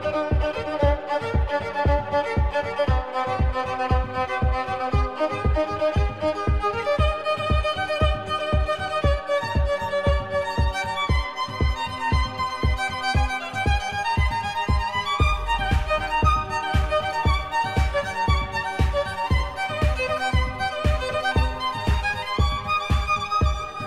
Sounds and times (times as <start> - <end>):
Violin, fiddle: 0.0 - 23.8.